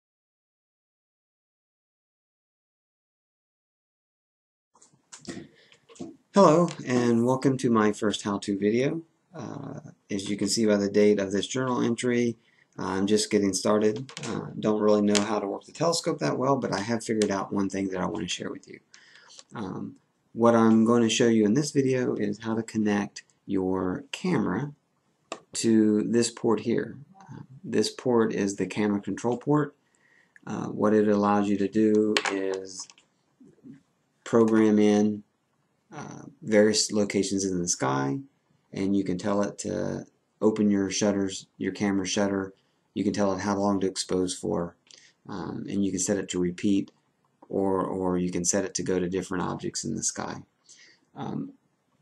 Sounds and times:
Speech: 5.2s - 18.8s, 19.4s - 24.8s, 25.4s - 29.7s, 30.4s - 32.9s, 33.5s - 35.2s, 35.9s - 50.5s, 51.2s - 51.5s.

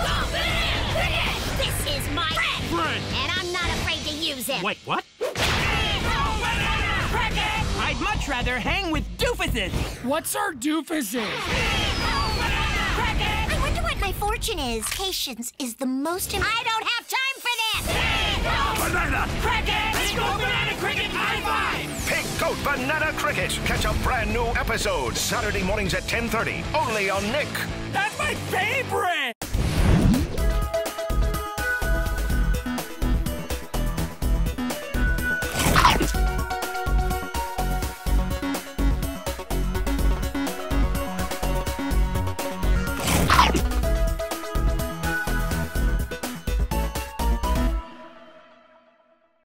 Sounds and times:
Music: 0.0s - 9.8s, 11.4s - 14.5s, 17.3s - 49.4s.

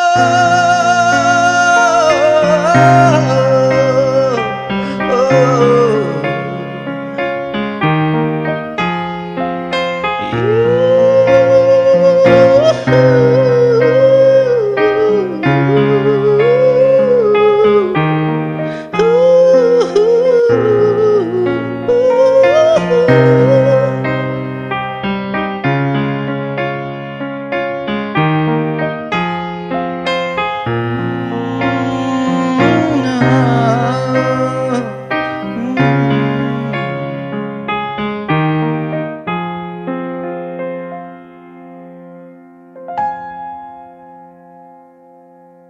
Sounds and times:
Singing: 0.0s - 6.6s, 31.3s - 37.0s
Electric piano: 0.0s - 45.6s.

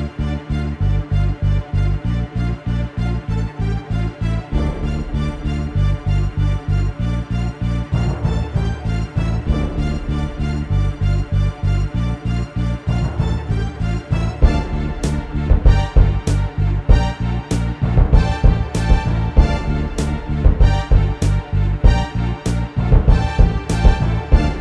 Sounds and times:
Timpani: 4.5s - 11.5s, 12.8s - 24.6s.

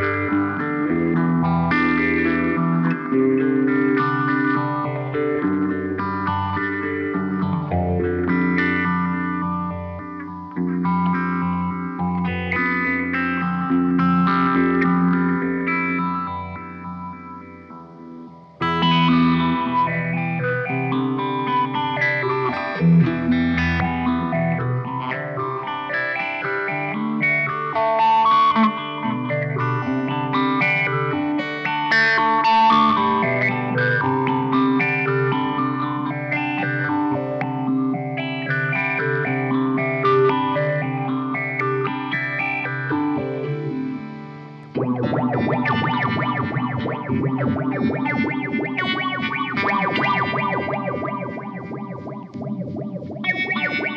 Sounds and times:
Music: 0.0s - 53.9s.

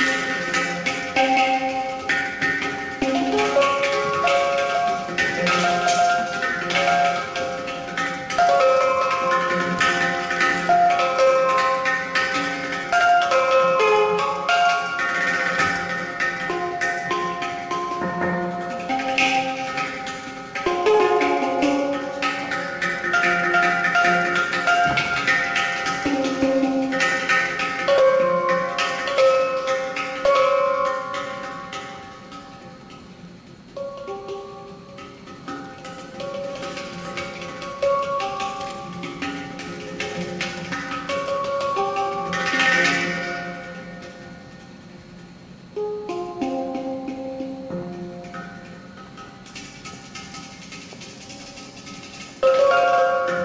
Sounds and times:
Drum: 0.0s - 32.1s
Inside, large room or hall: 0.0s - 53.4s.

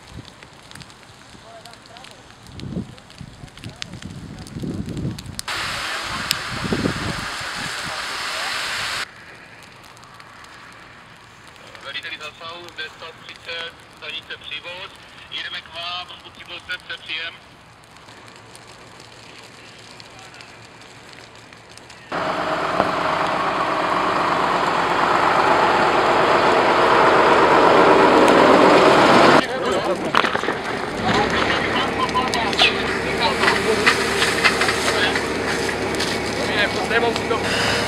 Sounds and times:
Fire: 0.0s - 37.8s
Vehicle: 5.4s - 14.0s, 17.4s - 37.8s
Speech: 5.7s - 6.6s, 11.6s - 17.4s, 19.6s - 20.6s, 29.4s - 30.2s, 31.0s - 34.0s, 36.4s - 37.5s.

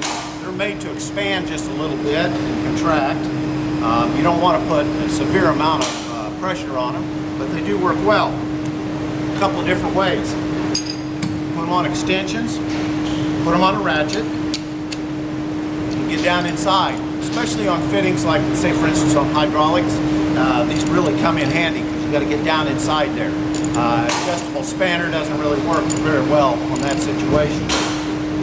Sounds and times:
Speech: 0.4s - 8.4s, 9.4s - 10.4s, 11.6s - 12.6s, 13.5s - 14.3s, 16.1s - 27.7s.

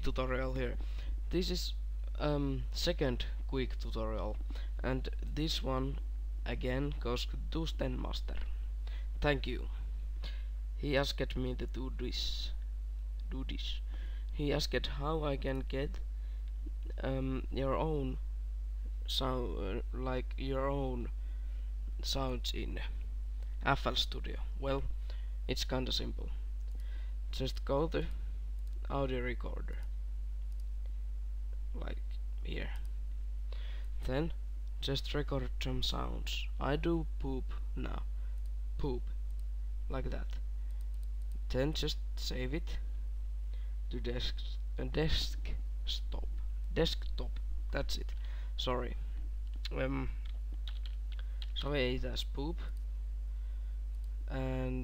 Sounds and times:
Speech: 0.0s - 8.6s, 9.2s - 9.8s, 10.8s - 12.6s, 13.3s - 16.0s, 16.9s - 18.2s, 19.1s - 21.1s, 22.0s - 23.0s, 23.6s - 24.9s, 25.5s - 26.4s, 27.3s - 28.2s, 28.8s - 29.8s, 31.7s - 32.8s, 34.0s - 38.1s, 38.8s - 39.1s, 39.9s - 40.4s, 41.5s - 42.9s, 43.9s - 49.0s, 49.7s - 50.2s, 51.6s - 52.8s, 54.3s - 54.8s.

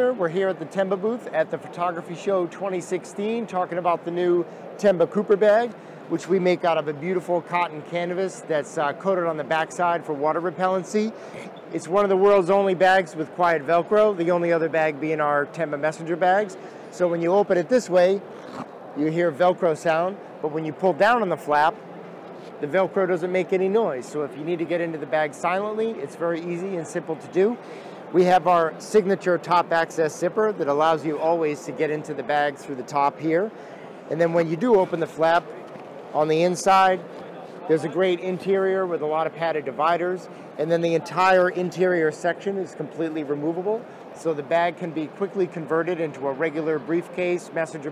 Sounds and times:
Speech: 0.0s - 18.2s, 19.0s - 21.8s, 22.6s - 33.5s, 34.1s - 35.6s, 36.2s - 47.9s.

